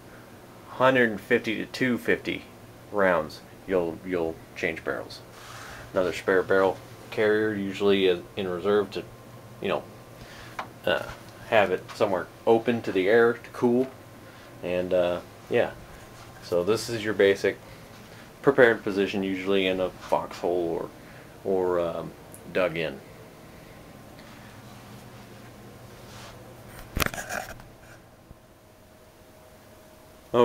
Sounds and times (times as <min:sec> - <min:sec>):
Speech: 0:00.7 - 0:05.3, 0:05.9 - 0:09.9, 0:10.8 - 0:14.0, 0:14.6 - 0:15.8, 0:16.4 - 0:17.6, 0:18.4 - 0:23.0.